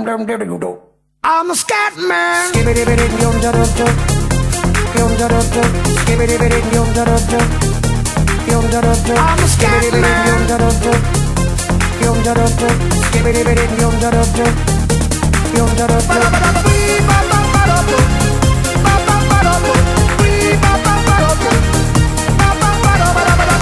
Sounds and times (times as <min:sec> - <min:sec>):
Music: 0:02.5 - 0:23.6.